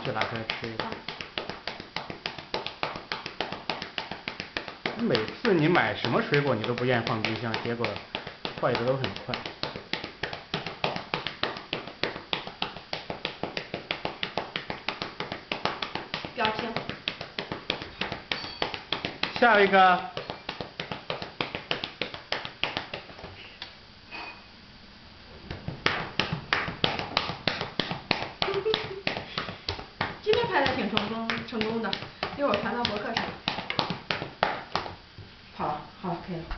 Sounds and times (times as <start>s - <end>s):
Speech: 30.3s - 33.4s, 35.6s - 36.5s.